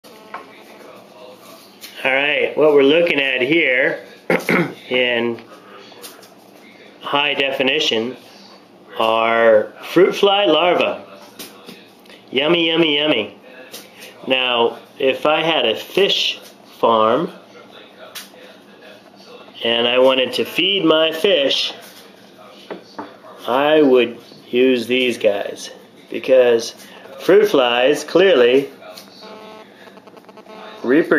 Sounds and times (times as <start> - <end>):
Inside, small room: 0.0 - 31.1
Speech: 0.3 - 29.8, 30.7 - 31.1.